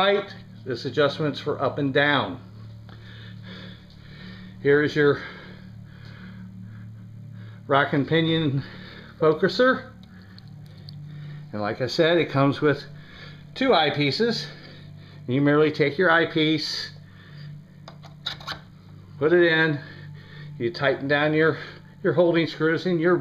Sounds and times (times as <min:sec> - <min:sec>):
Speech: 0:00.0 - 0:02.4, 0:11.6 - 0:12.9, 0:13.6 - 0:14.5, 0:15.3 - 0:17.0, 0:20.6 - 0:23.2
Pant: 0:02.5 - 0:04.6, 0:05.2 - 0:07.7, 0:08.6 - 0:09.2, 0:19.8 - 0:20.6.